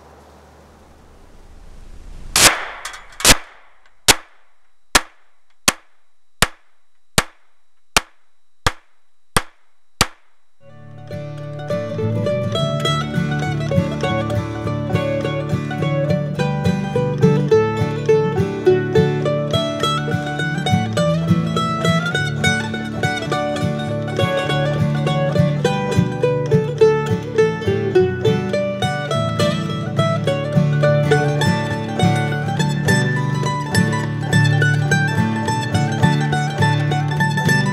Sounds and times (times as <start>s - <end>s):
Outside, rural or natural: 0.0s - 37.7s
Mandolin: 10.6s - 37.7s.